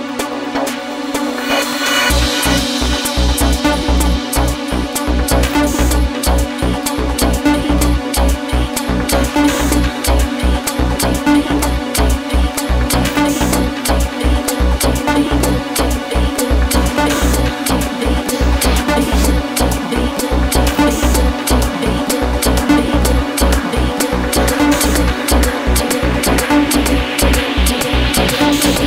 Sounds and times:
Trance music: 0.0 - 28.8.

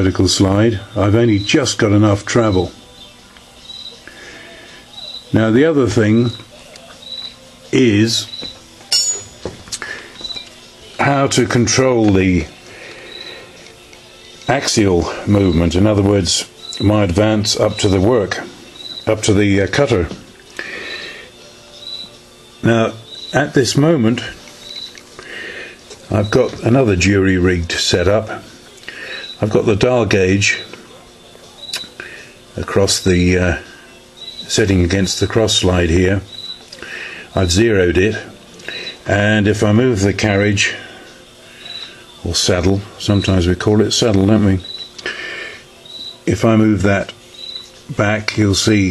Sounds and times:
Speech: 0.0 - 2.8, 5.3 - 6.9, 7.7 - 8.3, 11.0 - 12.5, 14.5 - 18.5, 19.1 - 20.2, 22.6 - 24.4, 26.1 - 28.6, 29.4 - 30.8, 32.6 - 33.7, 34.5 - 36.3, 37.4 - 38.3, 39.1 - 40.9, 42.2 - 44.7, 46.3 - 47.2, 47.9 - 48.9
Music: 0.0 - 48.9.

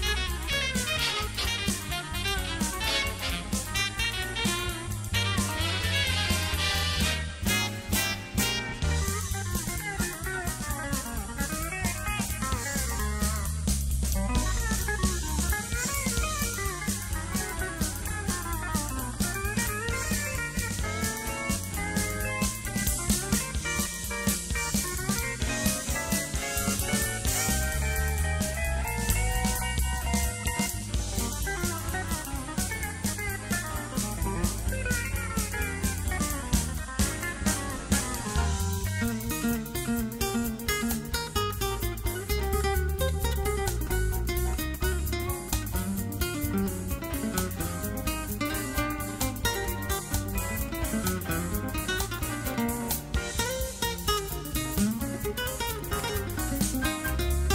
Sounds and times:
Plucked string instrument: 0.0 - 57.5.

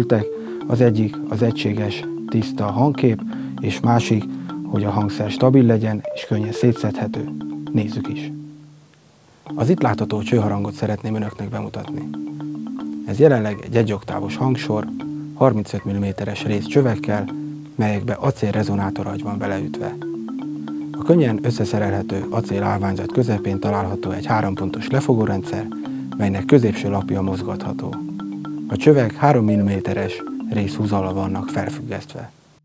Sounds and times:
Speech: 0.0 - 8.3, 9.6 - 12.1, 13.1 - 20.0, 21.0 - 28.0, 28.7 - 32.3
Marimba, xylophone: 0.0 - 8.8, 9.4 - 32.1.

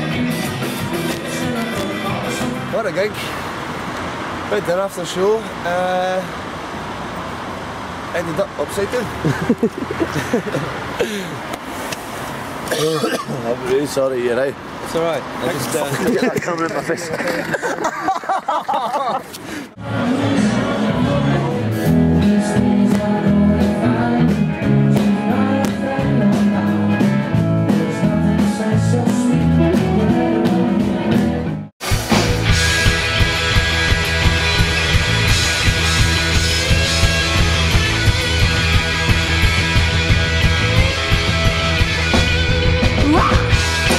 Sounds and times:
Music: 0.0 - 2.8, 19.8 - 43.9
Speech: 4.5 - 6.4, 13.0 - 17.5.

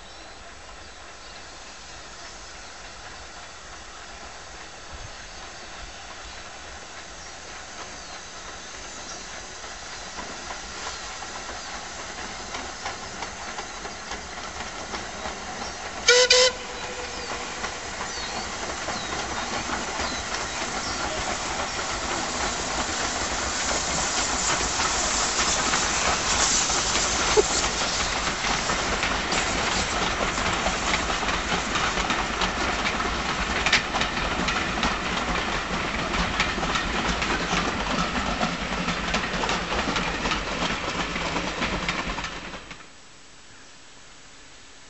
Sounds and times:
Railroad car, train wagon: 0.0 - 44.9
Clickety-clack: 6.1 - 43.0
Train whistle: 16.0 - 17.7.

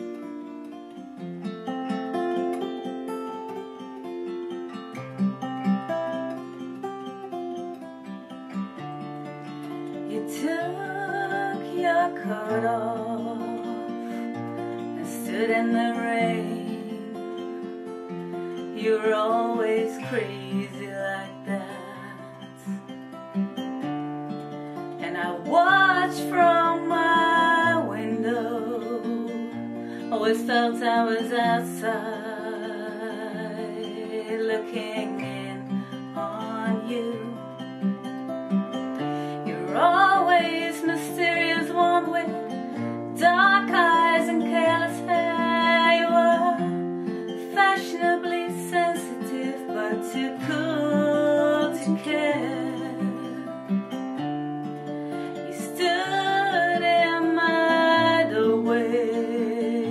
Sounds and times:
Acoustic guitar: 0.0 - 59.9.

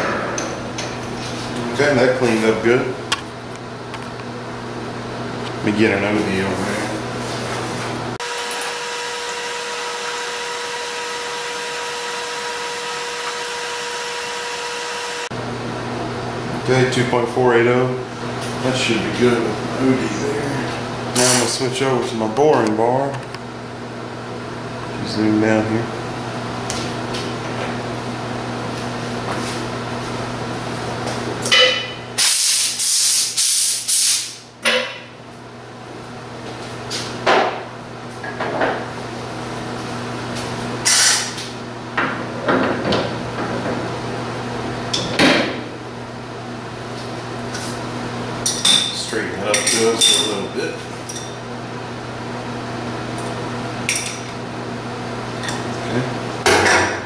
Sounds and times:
Speech: 1.7 - 3.0, 5.6 - 7.0, 16.6 - 23.2, 24.9 - 25.9, 49.0 - 50.8, 55.8 - 56.2.

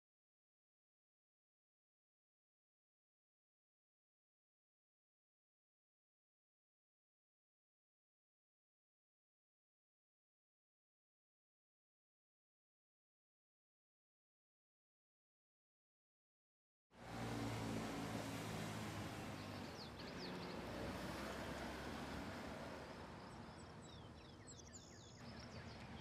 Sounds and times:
Outside, rural or natural: 16.9 - 26.0
Car: 17.0 - 26.0.

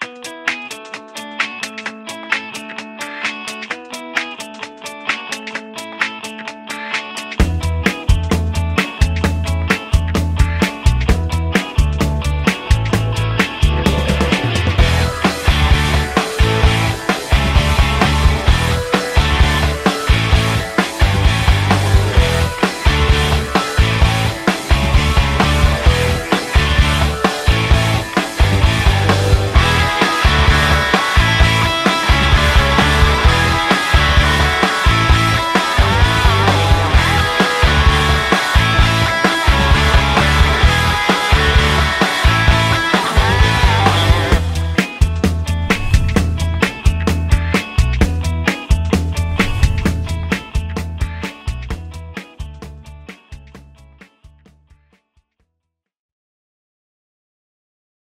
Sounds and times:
Music: 0.0 - 55.8.

